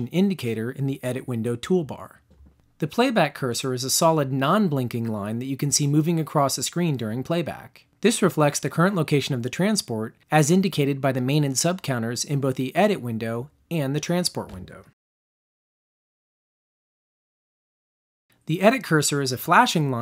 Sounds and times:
Speech: 0:00.0 - 0:15.0, 0:18.4 - 0:20.0.

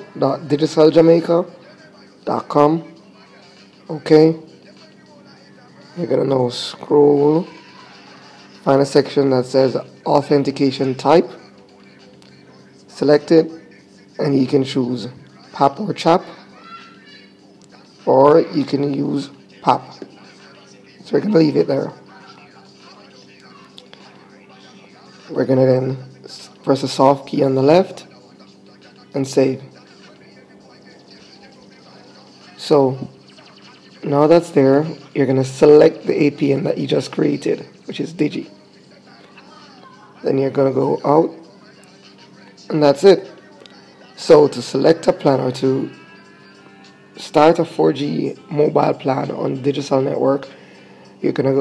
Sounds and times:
Speech: 0:00.0 - 0:17.1, 0:17.7 - 0:46.4, 0:47.2 - 0:50.6, 0:51.2 - 0:51.6
Inside, small room: 0:00.0 - 0:51.6.

